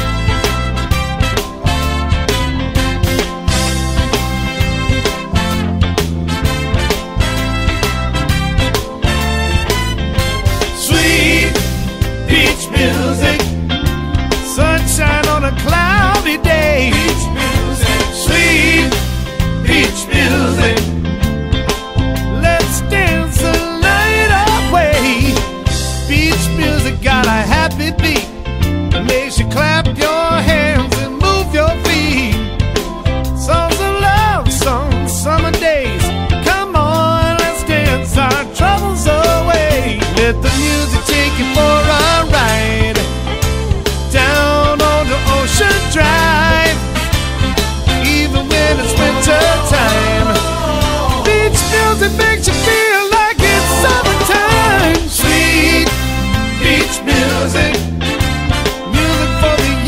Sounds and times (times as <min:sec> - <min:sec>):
Soundtrack music: 0:00.0 - 0:59.8.